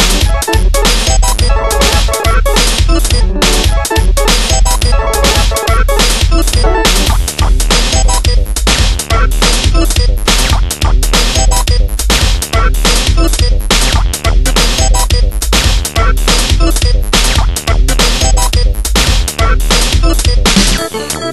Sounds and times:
Techno: 0.0 - 21.3.

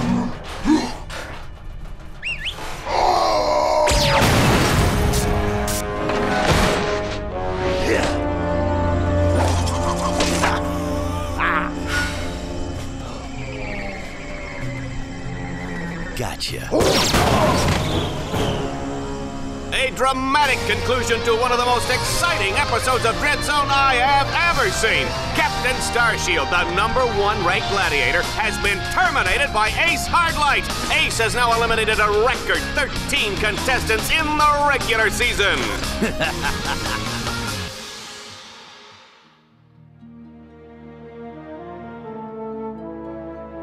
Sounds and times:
Music: 0.0 - 43.6.

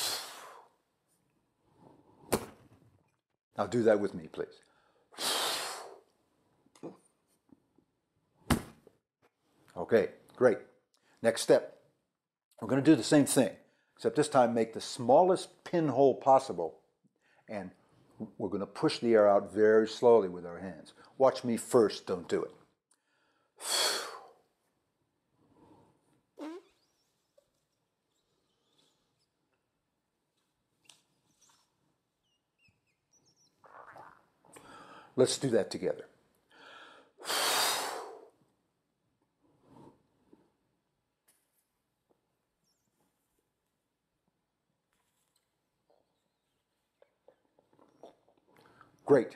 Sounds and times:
Speech: 3.6 - 4.6, 9.8 - 11.8, 12.6 - 16.8, 17.5 - 22.6, 35.2 - 36.1, 49.1 - 49.3.

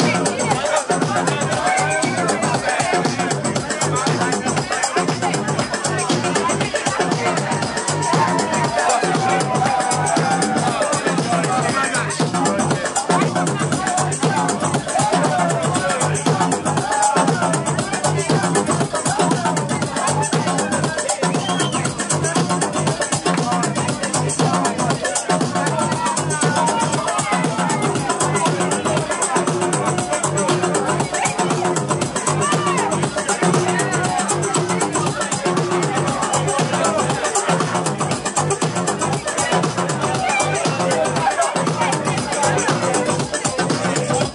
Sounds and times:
Music: 0.0 - 44.3
Speech: 0.0 - 44.3.

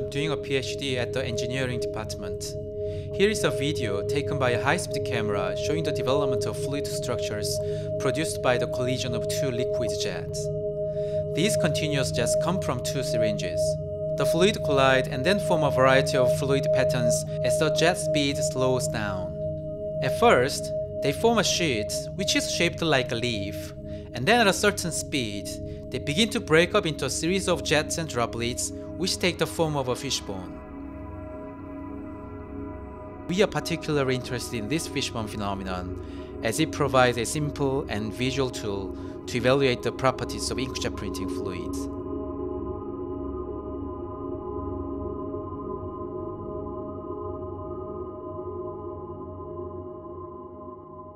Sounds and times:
Speech: 0.0 - 2.6, 3.2 - 10.5, 11.4 - 19.3, 20.0 - 30.6, 33.3 - 41.9
Music: 0.0 - 51.1.

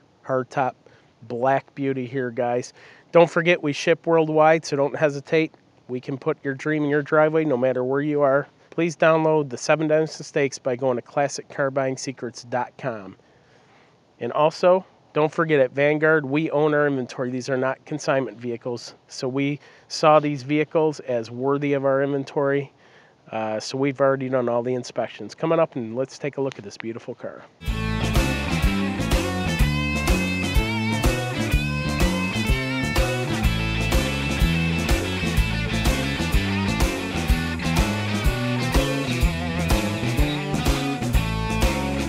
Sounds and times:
Speech: 0.3 - 13.2, 14.2 - 22.7, 23.3 - 27.5.

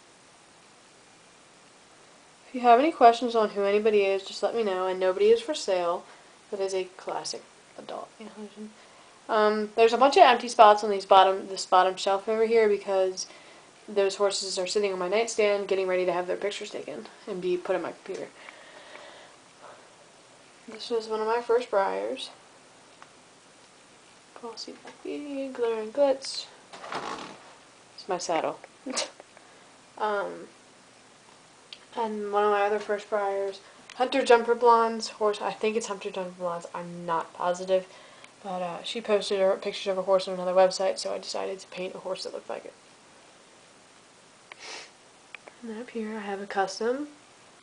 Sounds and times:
Speech: 2.5 - 13.3, 13.9 - 18.4, 20.7 - 22.4, 24.4 - 26.6, 28.0 - 29.2, 30.0 - 30.6, 31.8 - 42.8, 45.6 - 47.2.

